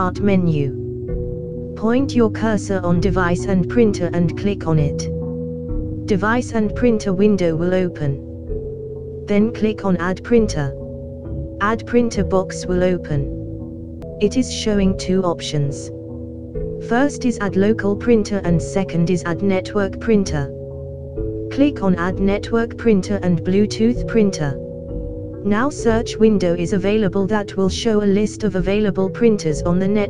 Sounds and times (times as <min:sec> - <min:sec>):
Speech: 0:00.0 - 0:00.8, 0:01.8 - 0:05.1, 0:06.1 - 0:08.2, 0:09.3 - 0:10.8, 0:11.6 - 0:13.4, 0:14.2 - 0:16.0, 0:16.8 - 0:20.6, 0:21.5 - 0:24.6, 0:25.4 - 0:30.0
Music: 0:00.0 - 0:30.0.